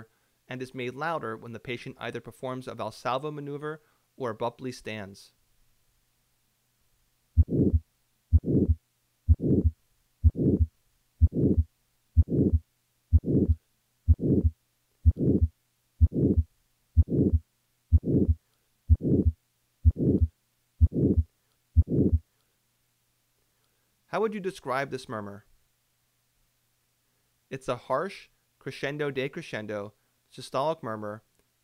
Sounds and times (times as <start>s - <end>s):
Heart murmur: 7.4s - 22.2s.